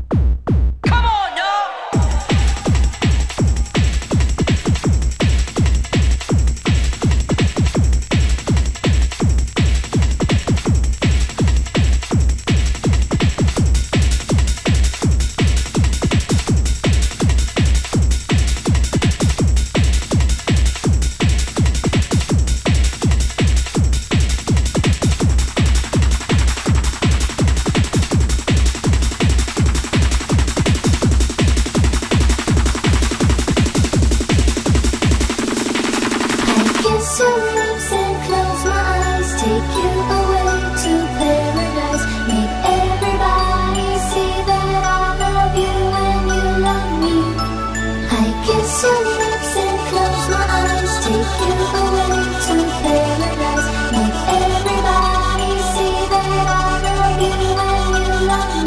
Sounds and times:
Techno: 0.0 - 58.6.

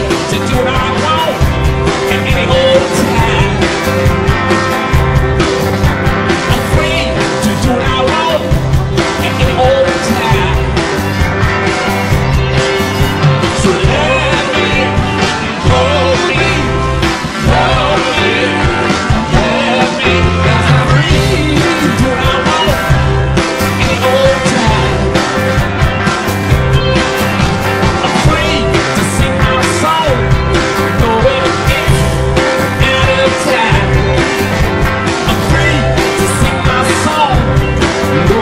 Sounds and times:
Electric guitar: 0.0 - 38.4.

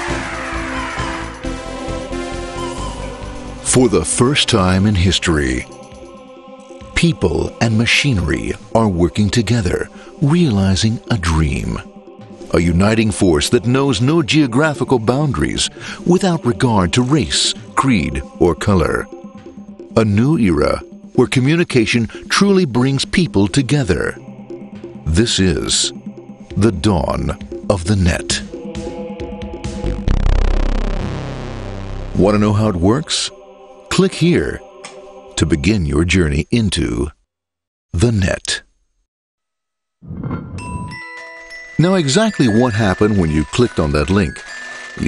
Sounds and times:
Music: 0.0 - 36.2, 40.3 - 45.0
Speech: 3.7 - 5.7, 7.0 - 11.9, 12.5 - 19.1, 20.0 - 24.2, 25.1 - 26.0, 26.6 - 28.5, 32.2 - 34.6, 35.4 - 37.2, 38.0 - 38.7, 41.8 - 45.0.

